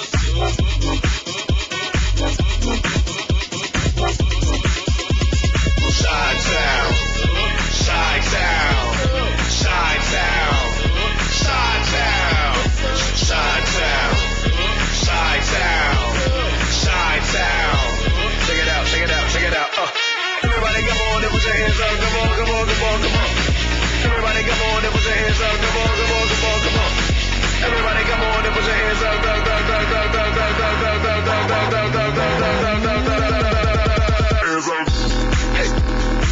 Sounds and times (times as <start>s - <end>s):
Music: 0.0s - 36.3s.